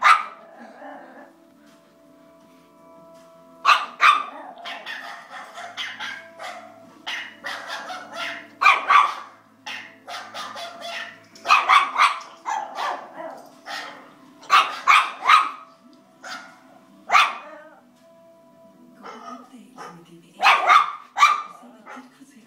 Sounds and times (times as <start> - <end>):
Bark: 0.0 - 0.4, 3.7 - 17.6, 19.0 - 22.1
Speech: 19.0 - 20.7, 21.4 - 22.4.